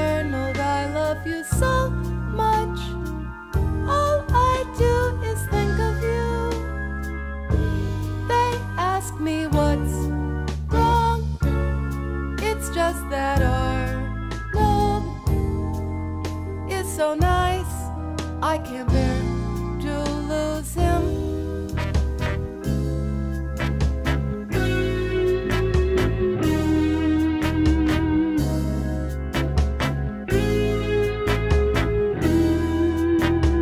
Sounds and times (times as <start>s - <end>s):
Music: 0.0s - 33.6s.